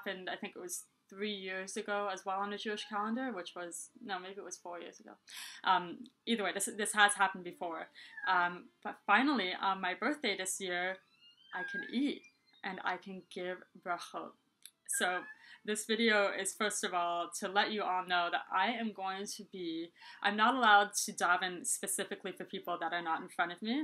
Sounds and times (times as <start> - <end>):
Speech: 0.0 - 11.0, 11.6 - 14.3, 14.9 - 23.8
Inside, small room: 0.0 - 23.8.